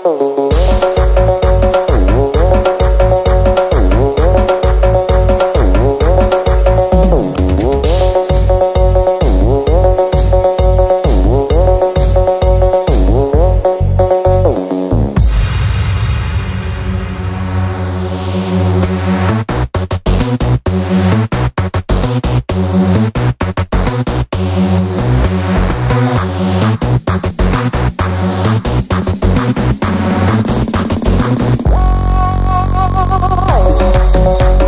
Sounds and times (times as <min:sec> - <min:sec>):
Music: 0:00.0 - 0:34.6.